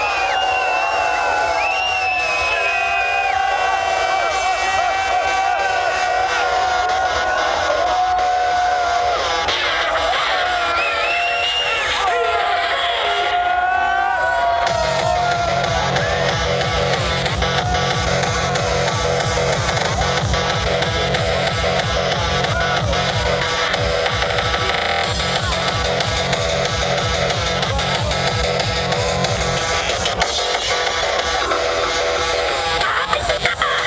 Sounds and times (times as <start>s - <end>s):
Techno: 0.0s - 33.8s.